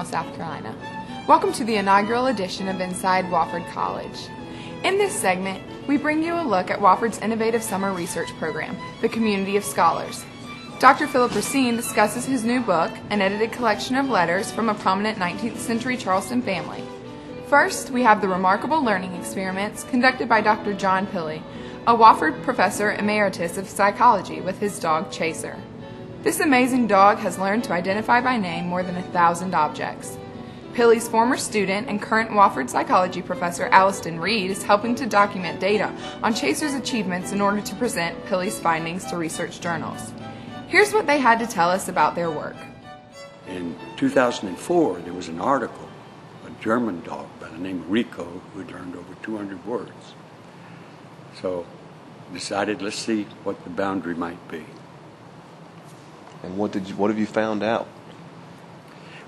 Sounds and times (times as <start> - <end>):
Speech: 0.0 - 10.2, 10.8 - 16.8, 46.5 - 50.1, 52.3 - 54.8, 56.4 - 57.9
Music: 0.0 - 51.6.